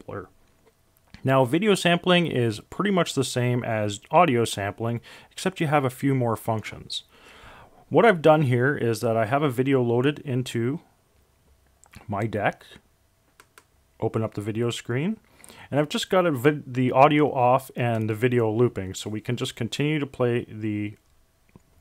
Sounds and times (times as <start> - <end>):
Speech: 0.0 - 0.3, 1.2 - 7.1, 7.9 - 10.9, 12.0 - 12.8, 14.0 - 21.0.